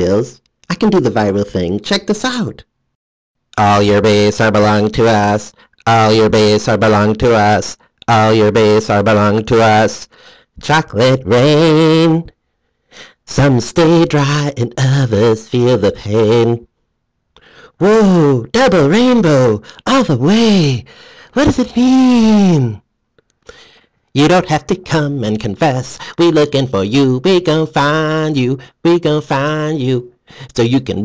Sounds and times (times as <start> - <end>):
Speech: 0.0 - 2.7, 3.6 - 12.3, 13.3 - 16.7, 17.8 - 22.8, 24.2 - 31.0.